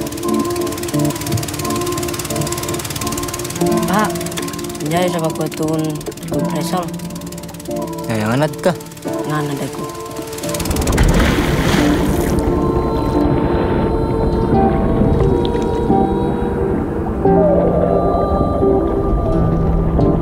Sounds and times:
Music: 0:00.0 - 0:20.2
Speech: 0:04.8 - 0:06.9, 0:08.1 - 0:09.9.

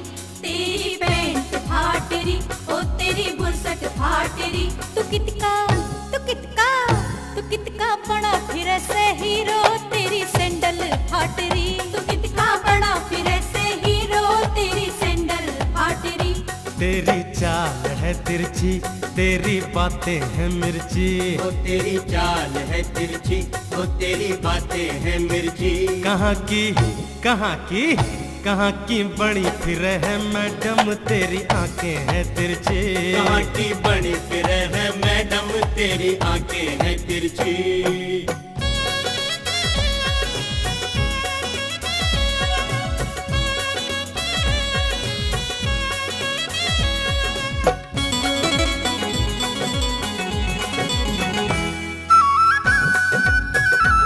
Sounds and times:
Music of Bollywood: 0:00.0 - 0:54.0.

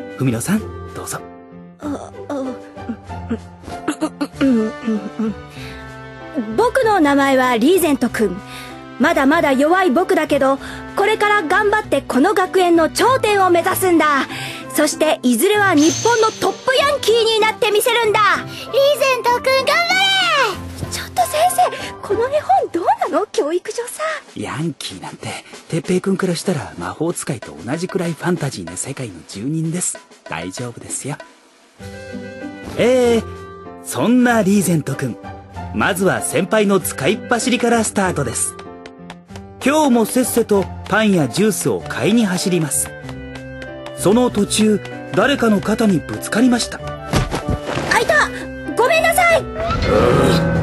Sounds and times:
Music: 0:00.0 - 0:50.6.

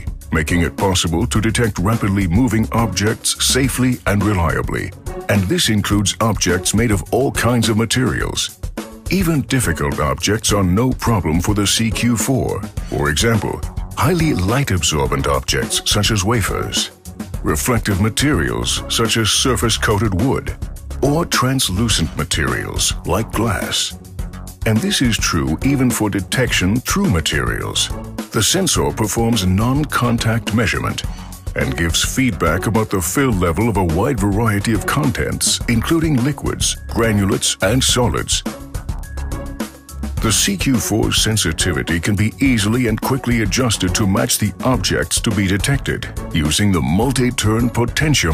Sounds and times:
Speech: 0:00.0 - 0:24.0, 0:24.6 - 0:38.5, 0:40.2 - 0:48.3
Music: 0:00.0 - 0:48.3.

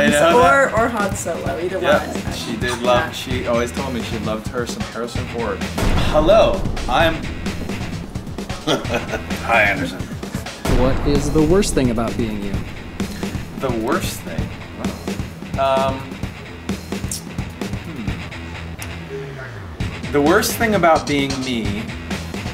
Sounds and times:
Speech: 0:00.0 - 0:07.2, 0:10.7 - 0:12.7, 0:13.6 - 0:14.5, 0:15.6 - 0:16.1, 0:19.1 - 0:21.9
Music: 0:00.0 - 0:22.5.

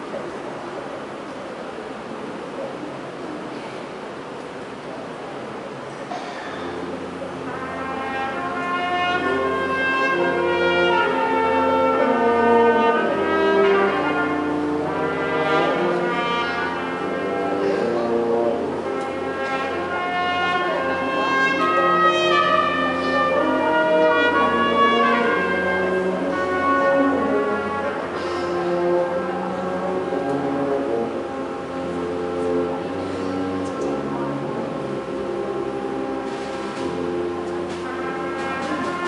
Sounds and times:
Music: 0:06.5 - 0:39.0.

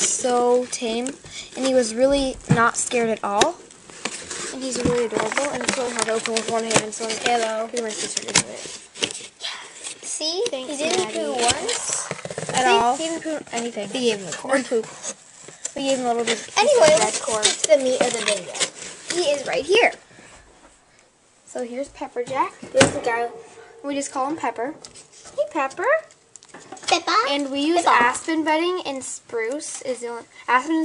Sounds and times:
Speech: 0:00.0 - 0:03.6, 0:04.5 - 0:08.7, 0:10.1 - 0:14.9, 0:15.8 - 0:20.0, 0:21.5 - 0:24.8, 0:25.4 - 0:26.1, 0:26.9 - 0:30.8.

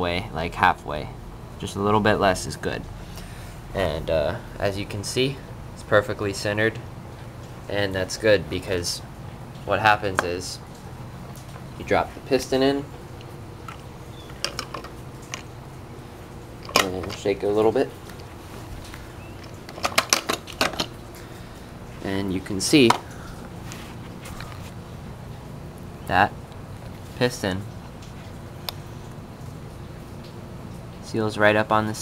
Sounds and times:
Speech: 0:00.0 - 0:02.9, 0:03.7 - 0:06.8, 0:07.7 - 0:09.1, 0:09.7 - 0:10.6, 0:11.8 - 0:12.9, 0:16.8 - 0:18.0, 0:22.0 - 0:23.0, 0:26.1 - 0:26.4, 0:27.2 - 0:27.7, 0:31.0 - 0:32.0.

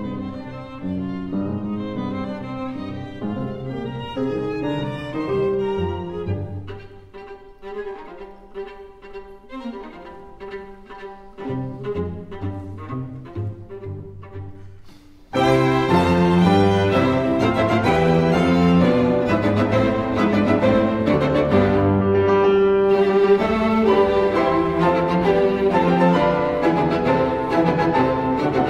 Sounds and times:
Cello: 0:00.0 - 0:28.7
Orchestra: 0:00.0 - 0:28.7
Piano: 0:00.0 - 0:28.7
Violin, fiddle: 0:00.0 - 0:28.7.

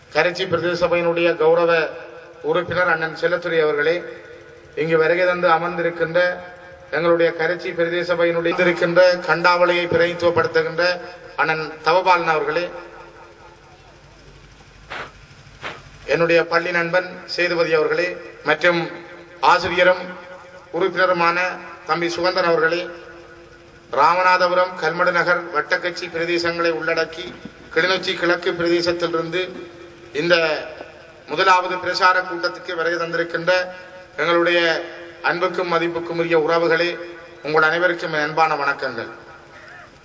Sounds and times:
Narration, monologue: 0:00.0 - 0:40.0
Male speech, man speaking: 0:00.2 - 0:04.1, 0:04.8 - 0:06.4, 0:07.0 - 0:12.8, 0:16.1 - 0:20.2, 0:20.8 - 0:23.0, 0:24.0 - 0:29.6, 0:30.2 - 0:30.7, 0:31.3 - 0:39.2.

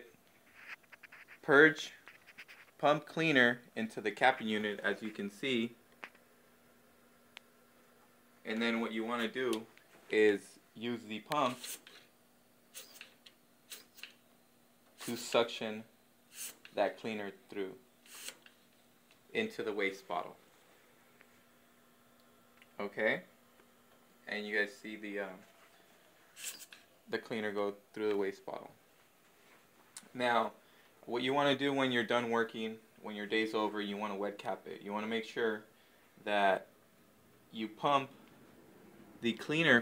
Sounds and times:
Speech: 0:01.4 - 0:02.0, 0:02.8 - 0:05.8, 0:08.5 - 0:11.6, 0:15.0 - 0:15.9, 0:16.8 - 0:17.8, 0:19.3 - 0:20.4, 0:22.8 - 0:23.3, 0:24.2 - 0:25.5, 0:27.1 - 0:28.8, 0:30.0 - 0:36.7, 0:37.5 - 0:38.2, 0:39.2 - 0:39.8.

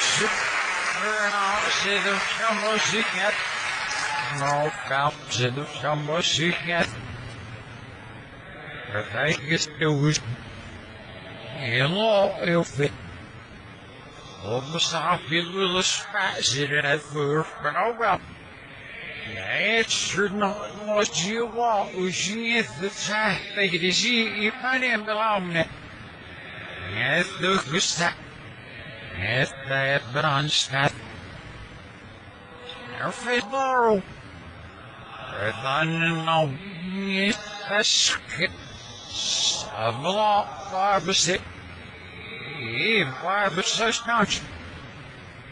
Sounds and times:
Male speech, man speaking: 0:00.0 - 0:07.0, 0:08.7 - 0:10.4, 0:11.5 - 0:13.0, 0:14.2 - 0:18.3, 0:19.2 - 0:25.8, 0:26.7 - 0:28.2, 0:29.1 - 0:31.0, 0:32.6 - 0:34.1, 0:35.2 - 0:41.5, 0:42.1 - 0:44.5
Narration, monologue: 0:00.0 - 0:08.3, 0:11.5 - 0:44.7.

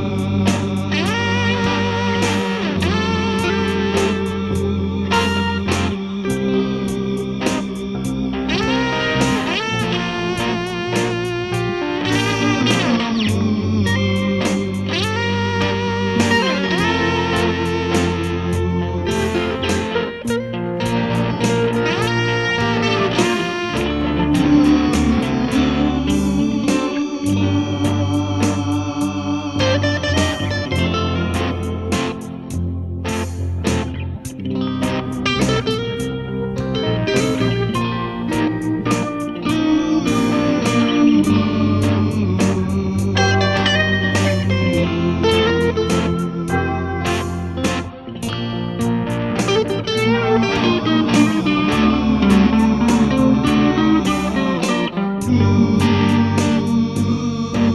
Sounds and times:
Music: 0:00.0 - 0:57.7.

